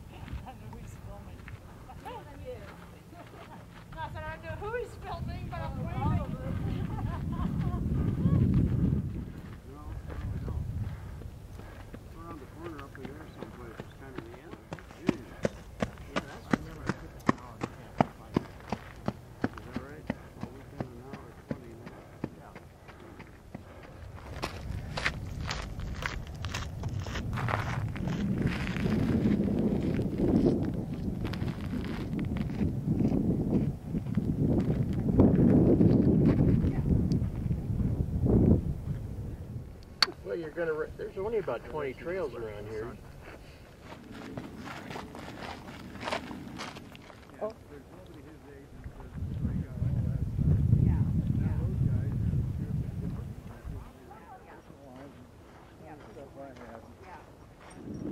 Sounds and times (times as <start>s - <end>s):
Walk, footsteps: 22.9s - 37.5s.